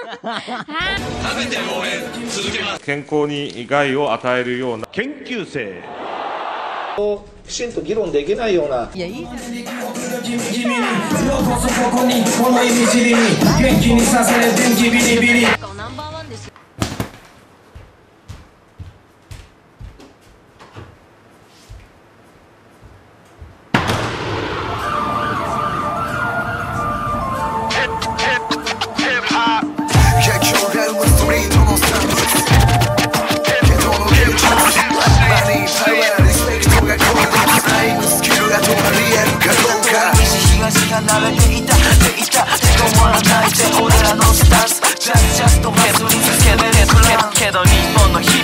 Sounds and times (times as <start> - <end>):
Hip hop music: 0.8 - 2.8, 9.0 - 15.6, 27.2 - 48.4
Rapping: 1.0 - 2.8, 9.0 - 15.6, 27.7 - 48.4
Emergency vehicle: 24.6 - 28.0.